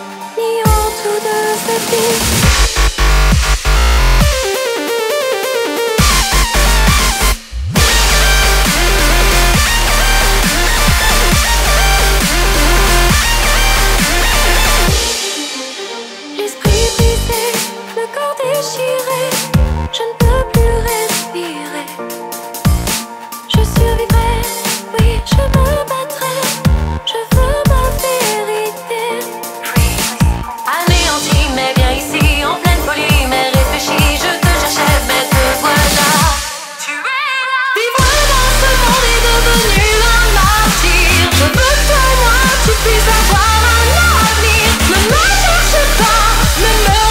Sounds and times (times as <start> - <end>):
Dubstep: 0.0 - 47.1.